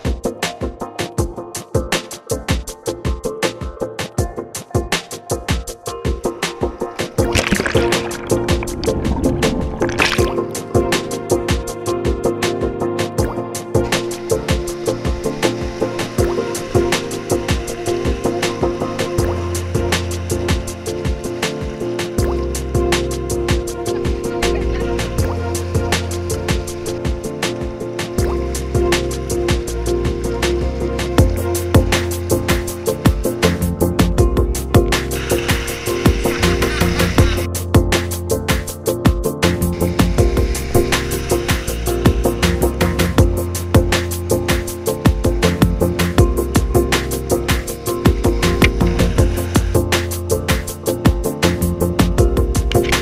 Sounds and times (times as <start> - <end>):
Music: 0.0 - 53.0
Stream: 5.0 - 53.0.